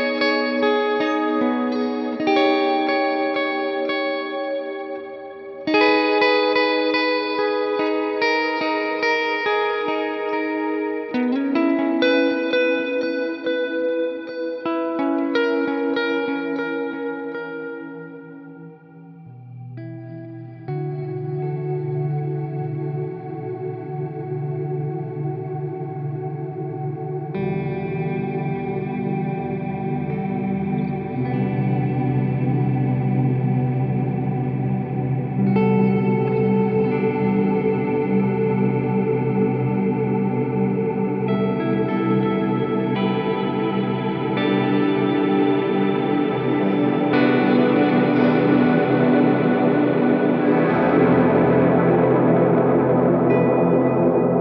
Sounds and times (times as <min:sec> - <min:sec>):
Music: 0:00.0 - 0:54.4.